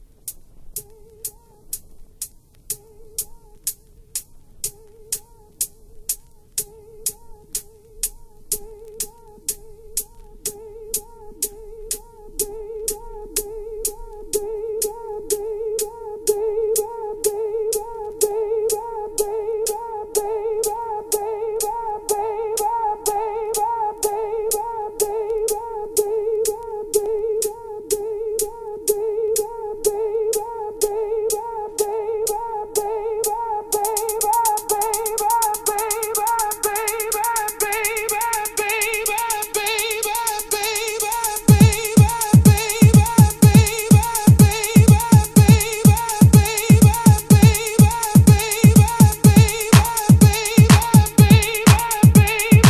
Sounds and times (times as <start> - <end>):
Music: 0.0 - 52.7.